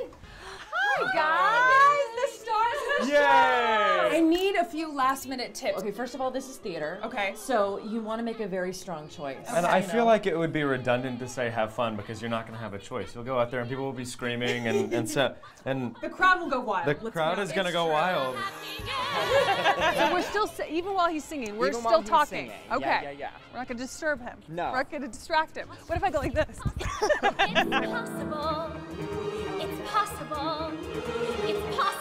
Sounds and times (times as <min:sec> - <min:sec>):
Music: 0:04.7 - 0:15.0, 0:17.3 - 0:32.0.